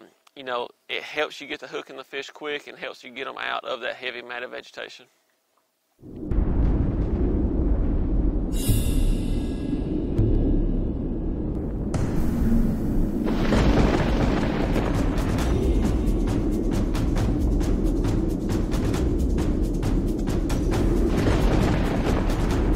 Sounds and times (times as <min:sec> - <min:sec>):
Music: 0:11.5 - 0:22.7.